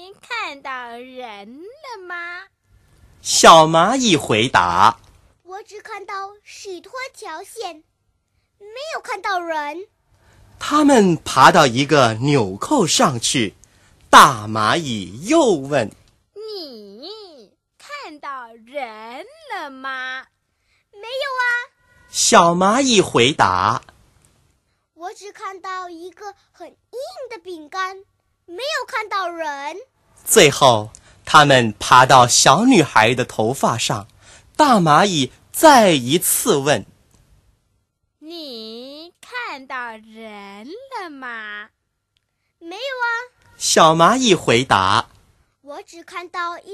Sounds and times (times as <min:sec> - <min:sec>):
Speech synthesizer: 0:00.0 - 0:02.5, 0:03.2 - 0:07.9, 0:08.6 - 0:09.9, 0:10.6 - 0:20.4, 0:21.0 - 0:23.9, 0:25.0 - 0:36.9, 0:38.2 - 0:41.8, 0:42.6 - 0:45.1, 0:45.7 - 0:46.7.